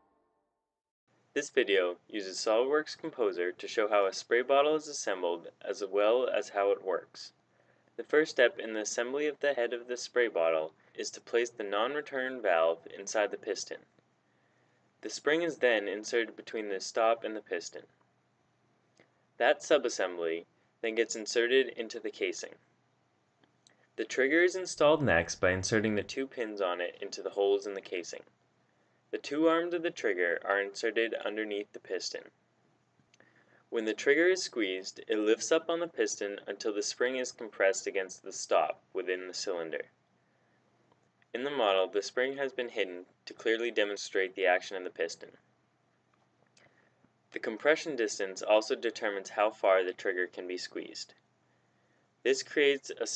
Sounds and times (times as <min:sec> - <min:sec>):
Speech: 0:01.4 - 0:07.4, 0:08.0 - 0:13.9, 0:15.0 - 0:17.9, 0:19.4 - 0:22.6, 0:24.0 - 0:28.3, 0:29.2 - 0:32.3, 0:33.7 - 0:39.9, 0:41.4 - 0:45.4, 0:47.4 - 0:51.1, 0:52.3 - 0:53.1.